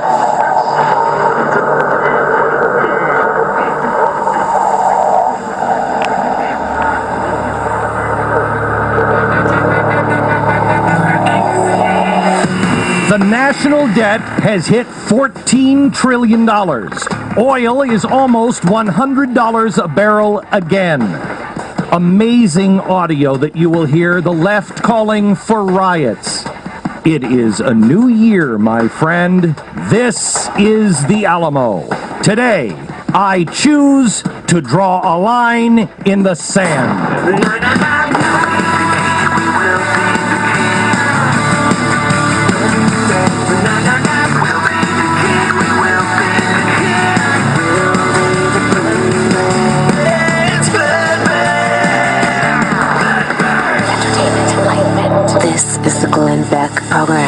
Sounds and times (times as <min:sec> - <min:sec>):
Radio: 0:00.0 - 0:41.6, 0:42.6 - 0:50.9
Music: 0:07.6 - 0:33.6, 0:35.8 - 0:57.2
Narration, monologue: 0:13.1 - 0:37.2.